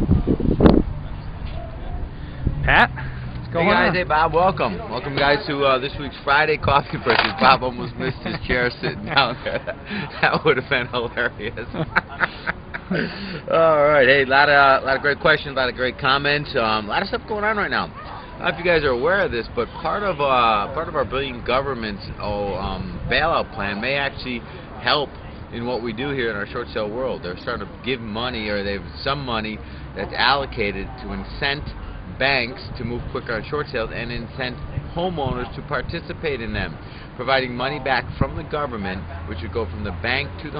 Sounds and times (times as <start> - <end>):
Speech: 3.5 - 9.6, 13.5 - 40.5.